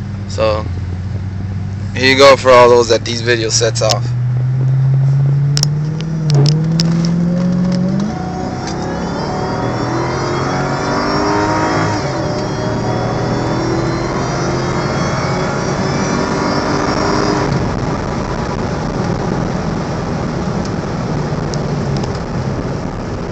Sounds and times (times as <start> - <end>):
Speech: 0.3 - 0.7, 2.0 - 4.1.